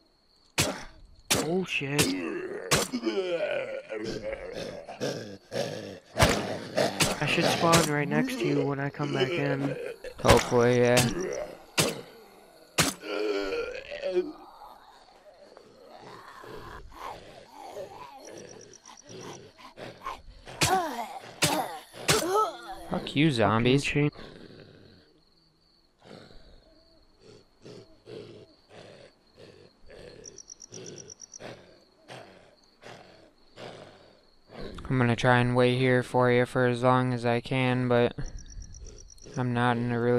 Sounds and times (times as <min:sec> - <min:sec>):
Speech: 0:01.4 - 0:02.6, 0:07.0 - 0:11.5, 0:20.7 - 0:24.2, 0:34.6 - 0:38.3, 0:39.4 - 0:40.1.